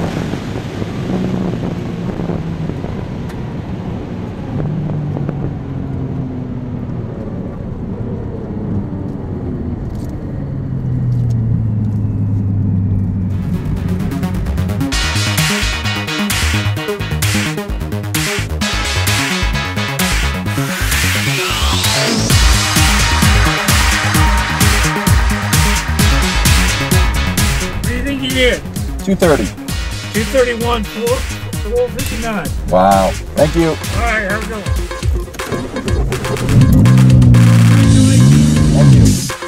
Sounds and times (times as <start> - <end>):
Trance music: 13.2 - 39.4.